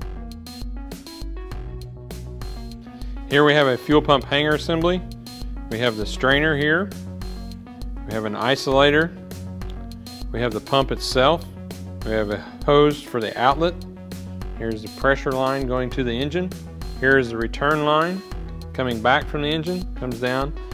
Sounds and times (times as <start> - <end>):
Music: 0.0 - 20.7
Speech: 3.3 - 5.0, 5.7 - 6.9, 8.1 - 9.2, 10.3 - 13.8, 14.6 - 18.2, 18.8 - 20.6.